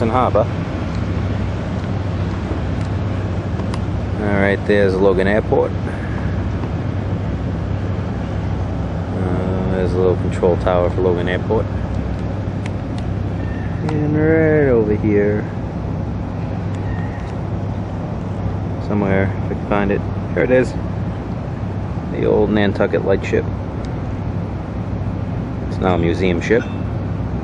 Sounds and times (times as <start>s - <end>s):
Speech: 0.0s - 0.5s, 4.2s - 5.8s, 9.1s - 11.7s, 13.8s - 15.6s, 18.8s - 20.8s, 22.1s - 23.5s, 25.7s - 26.8s.